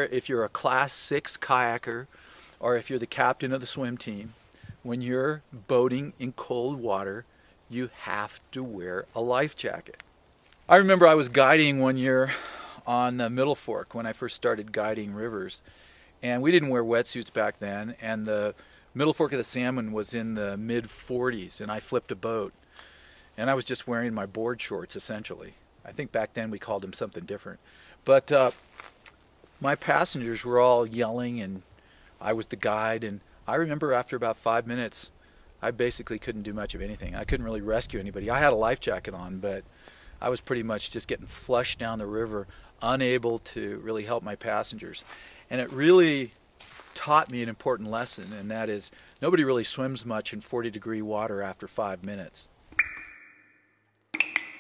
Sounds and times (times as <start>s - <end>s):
Speech: 0.0s - 10.0s, 10.7s - 15.6s, 16.2s - 22.5s, 23.4s - 28.6s, 29.6s - 39.6s, 40.2s - 52.5s.